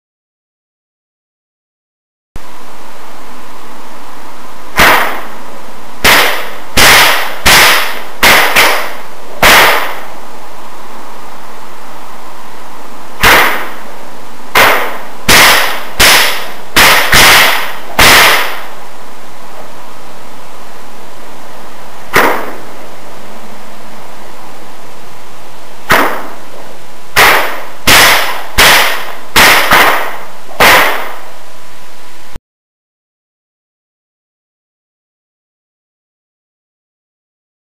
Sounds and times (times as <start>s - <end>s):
Whip: 4.8s - 5.4s, 6.0s - 10.1s, 13.2s - 13.8s, 14.5s - 18.7s, 22.1s - 22.7s, 25.9s - 26.4s, 27.2s - 31.2s.